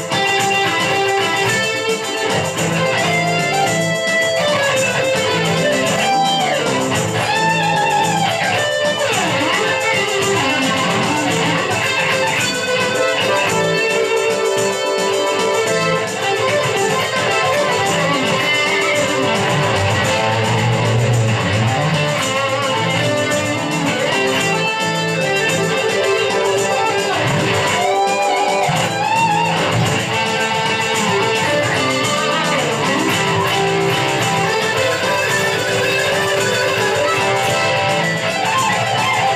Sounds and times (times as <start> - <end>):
Electric guitar: 0.0 - 39.3.